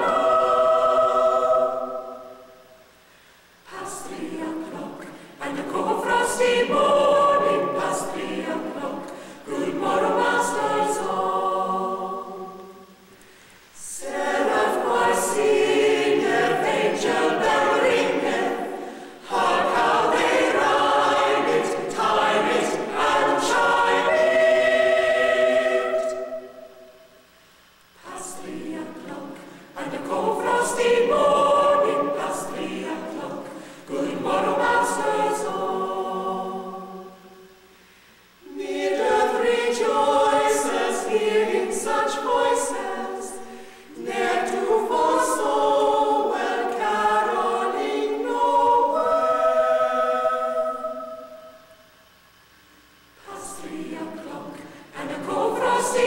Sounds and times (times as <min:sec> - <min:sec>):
Music: 0:03.7 - 0:13.1, 0:14.0 - 0:27.2, 0:28.0 - 0:37.6.